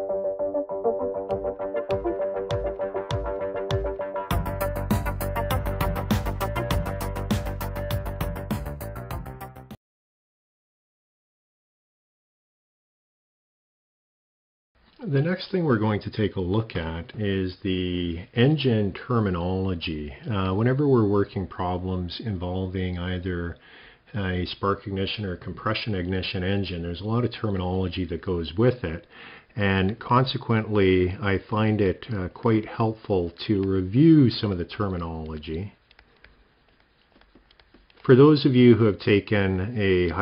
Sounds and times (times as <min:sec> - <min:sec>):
Speech: 0:15.0 - 0:35.8, 0:38.0 - 0:40.2.